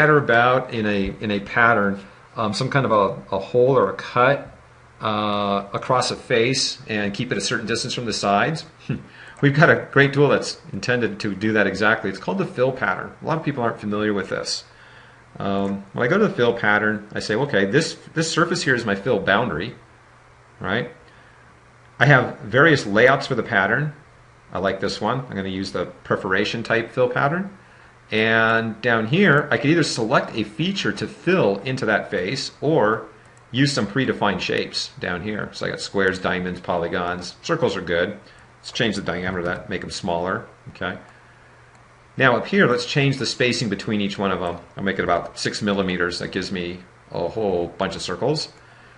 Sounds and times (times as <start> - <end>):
Speech: 0.0 - 14.8, 15.4 - 19.8, 20.6 - 21.0, 22.0 - 41.1, 42.2 - 48.6.